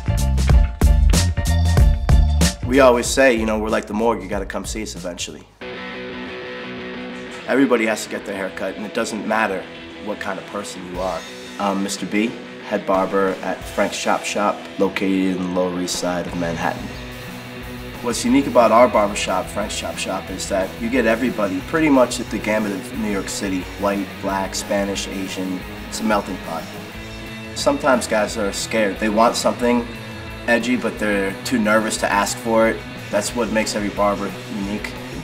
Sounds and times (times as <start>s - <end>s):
Music: 0.0s - 35.2s
Speech: 2.6s - 5.6s, 7.5s - 17.0s, 18.0s - 26.8s, 27.6s - 29.9s, 30.5s - 35.2s.